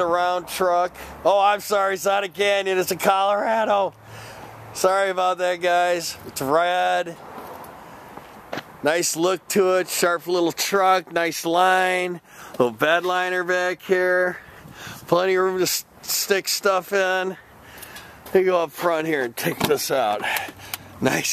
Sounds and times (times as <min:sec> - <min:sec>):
Speech: 0:00.0 - 0:04.0, 0:04.8 - 0:07.2, 0:08.8 - 0:14.4, 0:15.1 - 0:17.4, 0:18.3 - 0:20.4, 0:21.0 - 0:21.3.